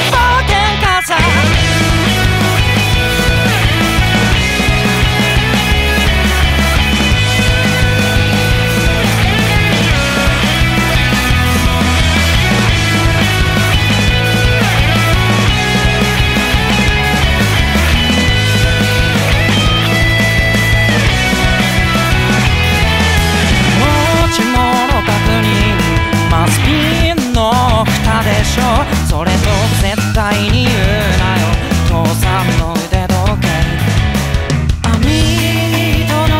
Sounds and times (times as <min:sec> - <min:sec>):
Music: 0:00.0 - 0:36.3.